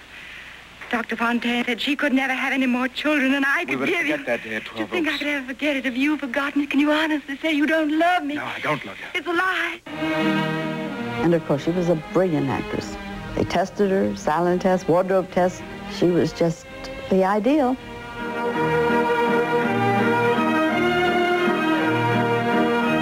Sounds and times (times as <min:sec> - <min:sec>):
Music: 0:09.9 - 0:23.0.